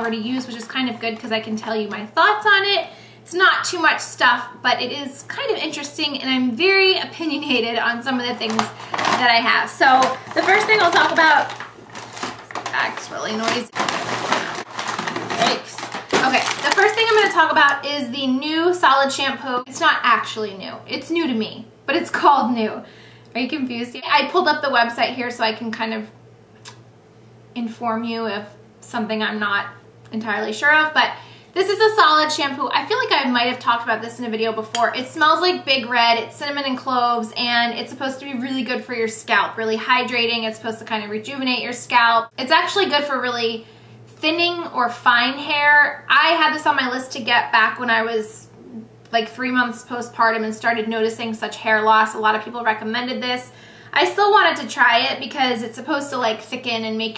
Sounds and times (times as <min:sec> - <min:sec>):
Speech: 0:00.0 - 0:11.6, 0:12.6 - 0:13.8, 0:15.3 - 0:26.2, 0:27.6 - 0:43.6, 0:44.2 - 0:57.1.